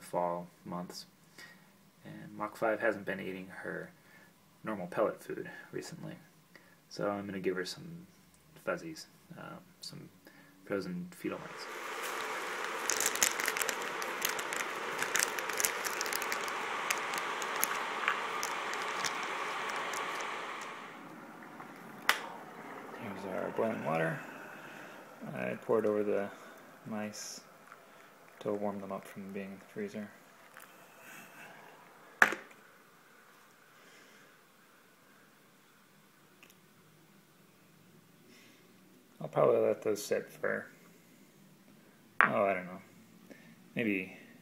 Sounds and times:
Speech: 0.0 - 1.1, 2.0 - 4.0, 4.6 - 6.3, 6.9 - 11.7, 23.0 - 24.3, 25.2 - 27.5, 28.4 - 30.2, 39.2 - 40.7, 42.2 - 42.9, 43.8 - 44.3.

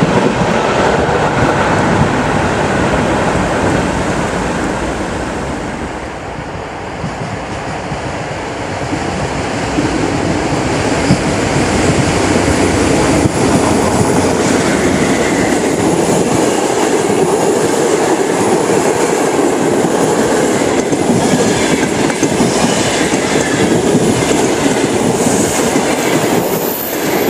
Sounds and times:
Railroad car, train wagon: 0.0 - 27.2
Subway, metro, underground: 0.0 - 27.2
Train: 0.0 - 27.2
Clickety-clack: 11.0 - 27.2.

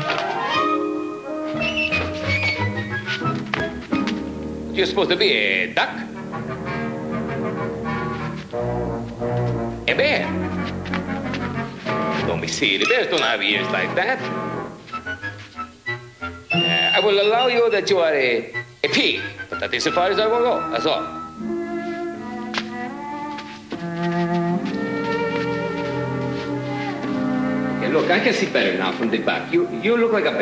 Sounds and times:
Music: 0.0 - 30.4
Speech: 4.8 - 6.1, 9.9 - 10.3, 12.3 - 14.2, 17.0 - 21.1, 27.8 - 30.4.

